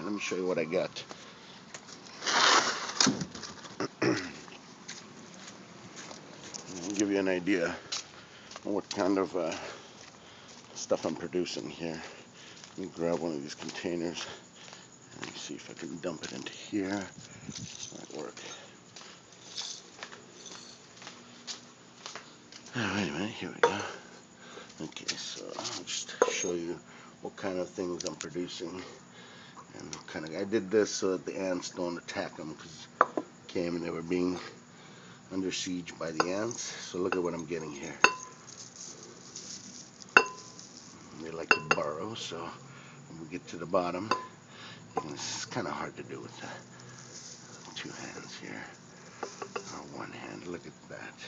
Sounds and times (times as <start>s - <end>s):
Speech: 0.0s - 1.1s, 6.7s - 7.9s, 8.6s - 9.8s, 10.8s - 12.2s, 12.8s - 14.4s, 15.2s - 17.2s, 17.9s - 18.6s, 22.7s - 24.0s, 24.8s - 29.0s, 29.7s - 32.9s, 33.5s - 34.6s, 35.3s - 38.1s, 41.1s - 44.2s, 45.0s - 46.6s, 47.7s - 48.8s, 49.6s - 51.2s.